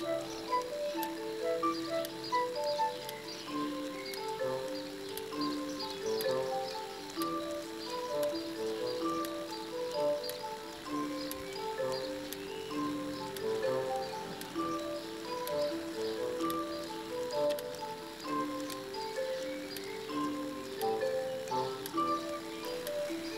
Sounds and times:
Music: 0:00.0 - 0:23.3.

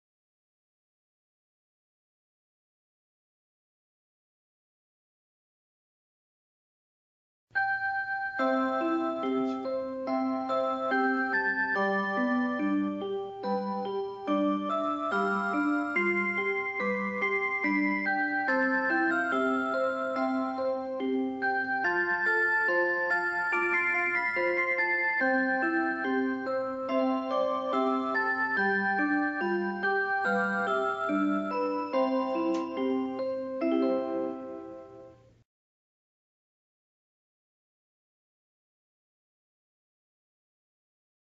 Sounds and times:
Music: 0:07.6 - 0:35.4
Tick-tock: 0:32.3 - 0:32.9.

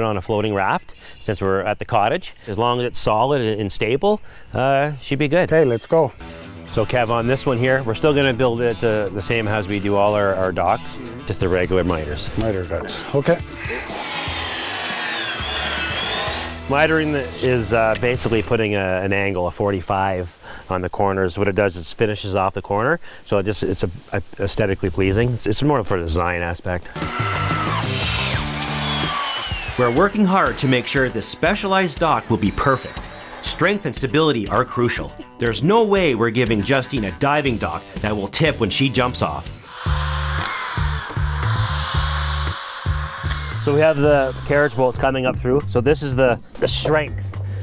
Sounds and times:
Speech: 0:00.0 - 0:06.1, 0:06.7 - 0:13.4, 0:16.7 - 0:27.0, 0:29.8 - 0:39.5, 0:43.6 - 0:47.2
Music: 0:05.5 - 0:19.2, 0:27.0 - 0:47.6
Outside, rural or natural: 0:12.3 - 0:35.2.

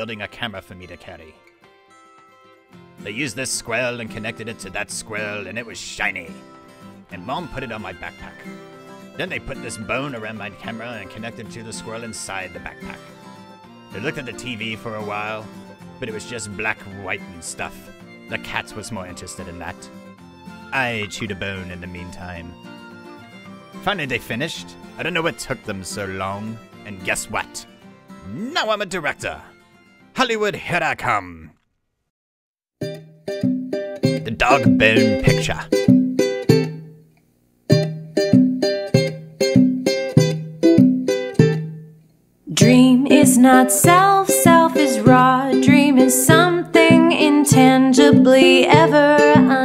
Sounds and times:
Speech: 0:00.0 - 0:01.4, 0:03.0 - 0:06.3, 0:07.1 - 0:08.5, 0:09.2 - 0:13.0, 0:14.0 - 0:19.9, 0:20.8 - 0:22.6, 0:23.8 - 0:29.5, 0:30.2 - 0:31.6, 0:34.3 - 0:35.8, 0:42.5 - 0:43.5
Music: 0:00.0 - 0:30.7, 0:32.8 - 0:49.6.

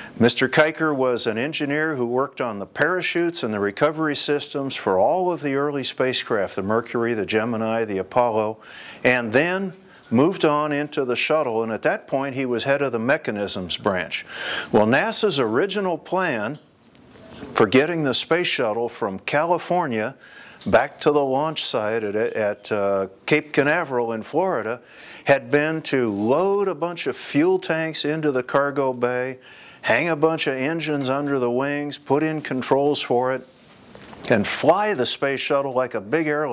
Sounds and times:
Speech: 0:00.2 - 0:16.7, 0:17.5 - 0:33.5, 0:34.2 - 0:36.5.

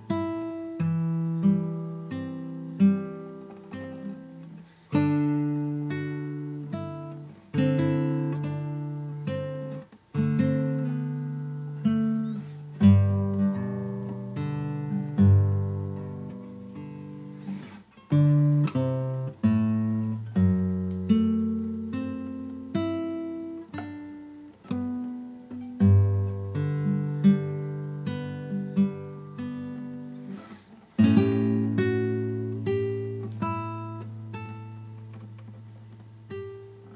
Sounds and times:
Strum: 0:00.0 - 0:36.9.

